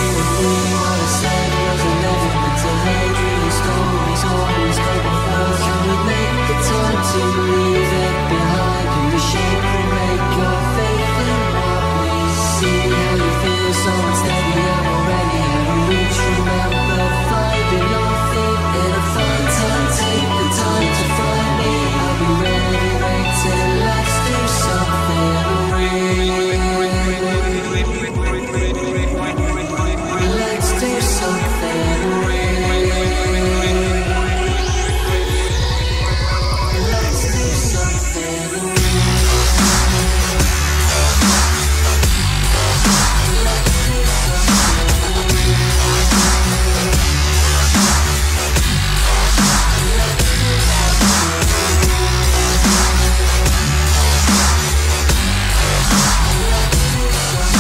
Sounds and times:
Dubstep: 0.0 - 57.6.

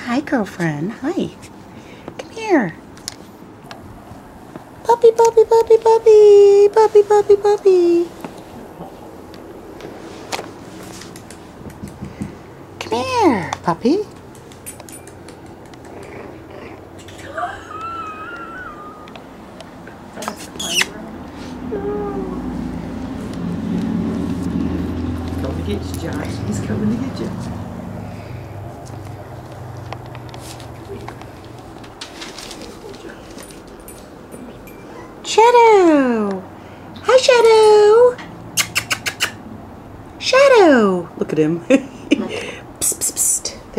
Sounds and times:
Speech: 4.8 - 8.1.

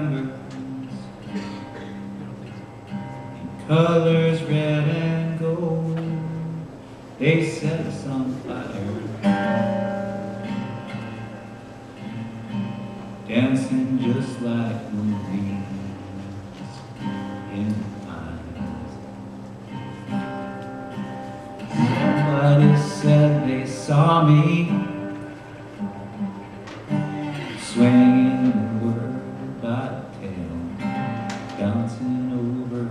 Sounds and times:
Acoustic guitar: 0.0 - 32.9
Strum: 0.0 - 32.9.

